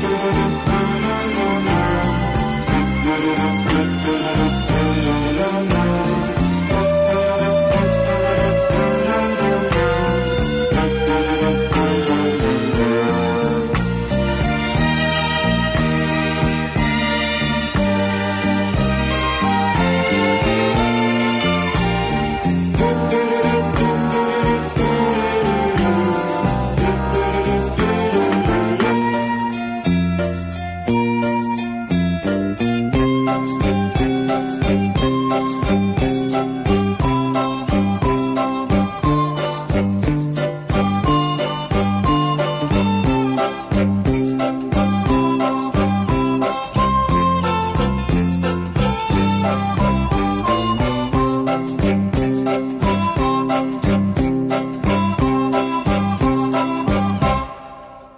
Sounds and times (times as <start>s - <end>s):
Jingle bell: 8.8s - 31.8s.